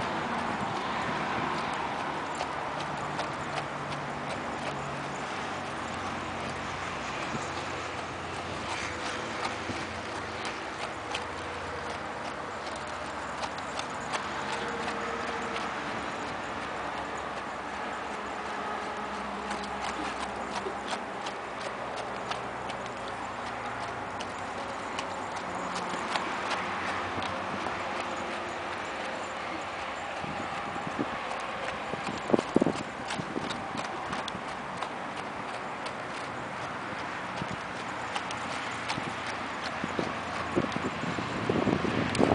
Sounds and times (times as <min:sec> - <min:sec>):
Clip-clop: 0:00.0 - 0:42.3.